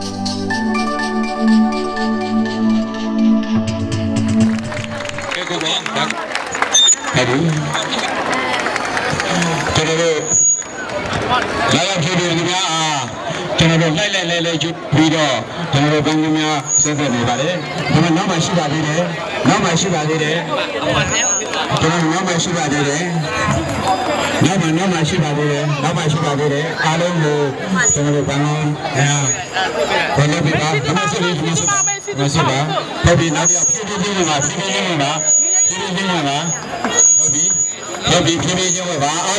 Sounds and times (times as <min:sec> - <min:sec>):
Speech: 0:05.2 - 0:06.5, 0:07.1 - 0:39.3.